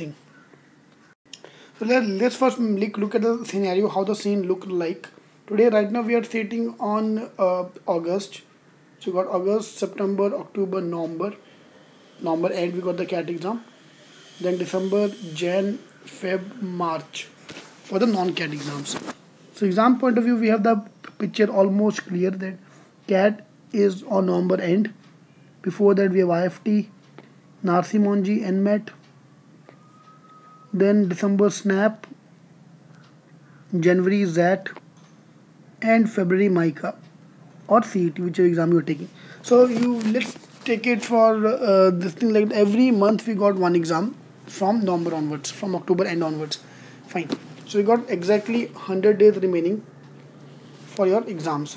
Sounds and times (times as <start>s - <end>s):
Speech: 0.0s - 0.2s, 1.8s - 11.4s, 12.2s - 13.7s, 14.4s - 25.0s, 25.6s - 26.9s, 27.6s - 29.0s, 30.7s - 32.2s, 33.7s - 34.8s, 35.8s - 37.0s, 37.7s - 49.9s, 50.9s - 51.7s.